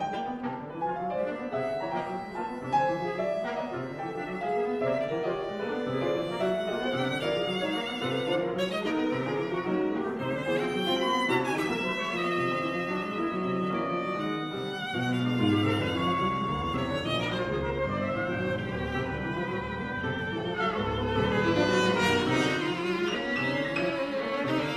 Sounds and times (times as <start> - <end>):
Violin, fiddle: 0.0 - 24.7.